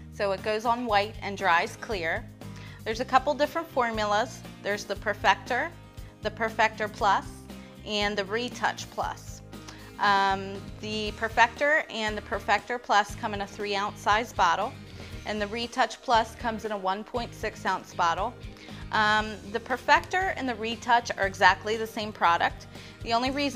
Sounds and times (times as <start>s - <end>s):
Speech: 0.2s - 2.2s, 2.8s - 9.4s, 10.0s - 23.5s.